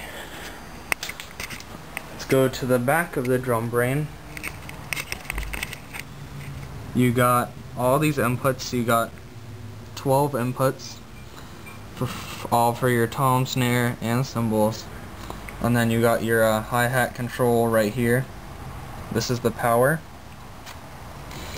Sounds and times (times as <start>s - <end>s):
Speech: 2.2s - 4.1s, 7.0s - 9.1s, 10.0s - 11.0s, 12.0s - 14.9s, 15.6s - 18.3s, 19.1s - 20.1s.